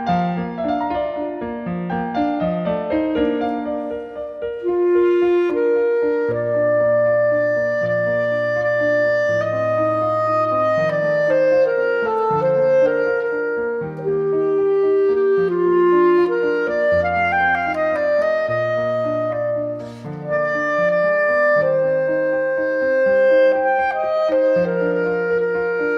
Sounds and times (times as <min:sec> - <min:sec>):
Clarinet: 0:00.0 - 0:25.9.